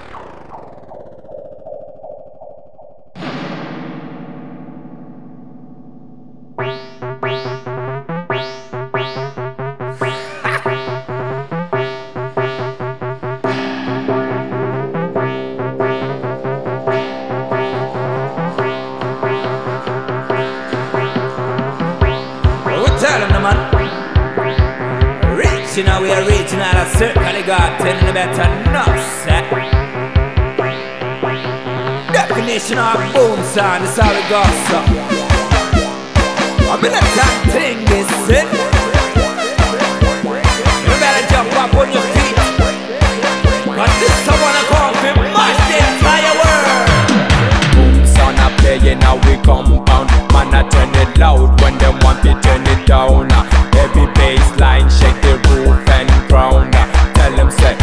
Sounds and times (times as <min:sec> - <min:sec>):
Music: 0:03.2 - 0:57.8.